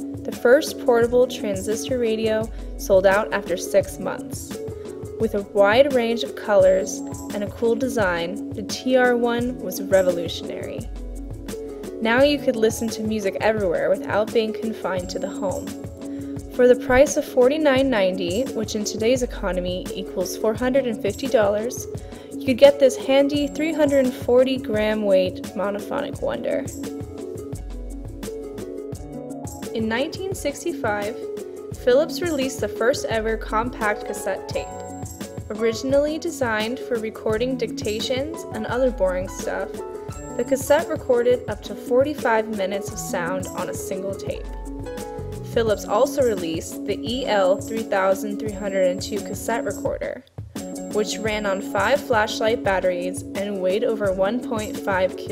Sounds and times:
Music: 0.0 - 55.3
Speech: 0.3 - 4.5, 5.2 - 10.9, 12.0 - 15.7, 16.6 - 26.7, 29.8 - 31.2, 31.8 - 34.8, 35.5 - 39.8, 40.4 - 44.5, 45.5 - 50.2, 50.9 - 55.3.

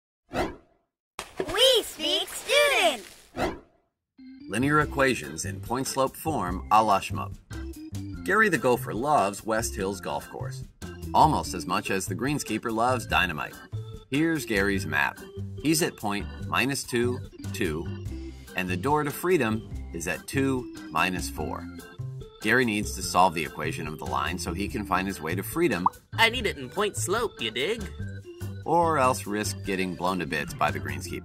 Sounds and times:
Speech: 1.4 - 3.0, 4.5 - 7.3, 8.3 - 10.6, 11.2 - 17.9, 18.6 - 21.7, 22.4 - 27.9, 28.7 - 31.2.

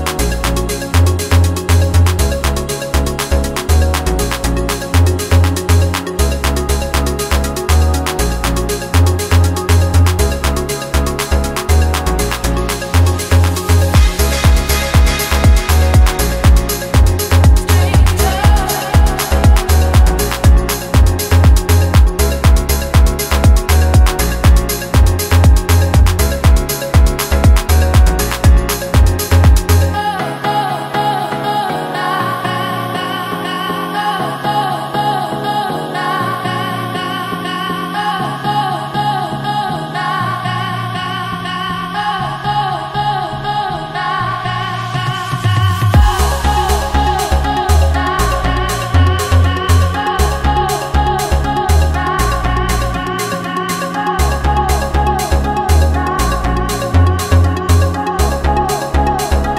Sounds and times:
Electronica: 0.0 - 59.5.

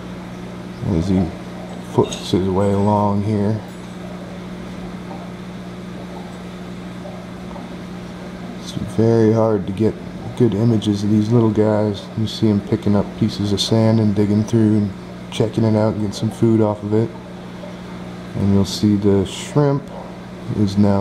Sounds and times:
Speech: 0.8 - 3.7, 8.6 - 17.2, 18.3 - 19.9, 20.5 - 21.0.

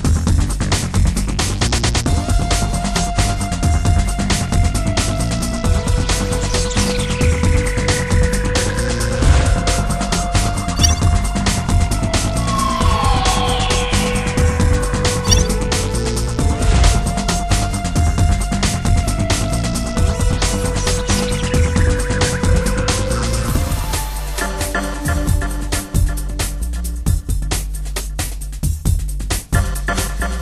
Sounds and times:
Music: 0.0 - 30.4.

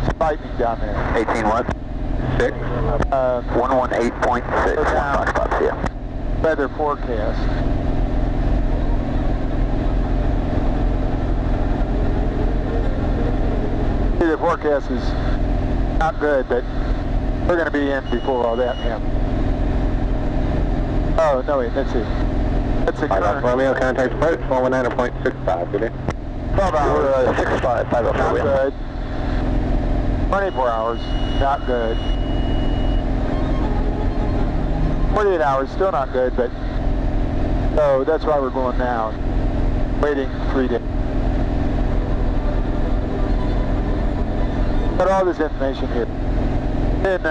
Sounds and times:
Car: 0.0 - 47.3.

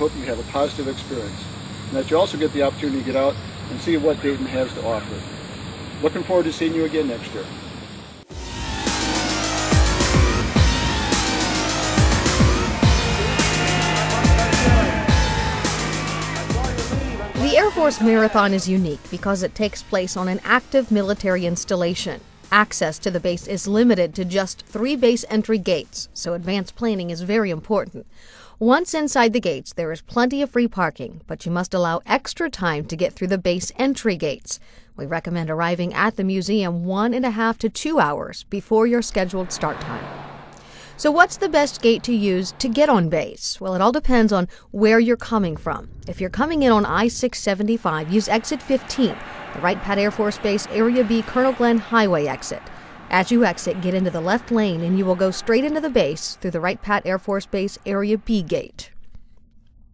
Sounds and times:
Speech: 0.0 - 5.2, 6.0 - 7.5, 16.6 - 28.0, 28.6 - 40.1, 41.0 - 58.9
Outside, urban or manmade: 0.0 - 17.9, 39.1 - 43.4
Music: 8.3 - 27.2, 41.0 - 43.2, 46.4 - 58.6.

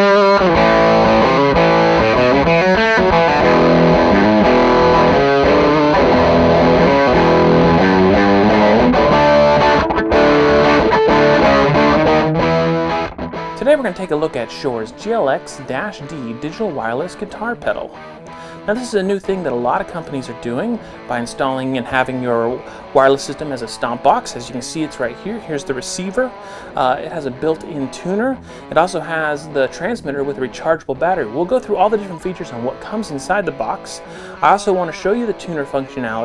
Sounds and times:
Music: 0.0 - 36.2
Speech: 13.6 - 18.0, 18.6 - 36.2.

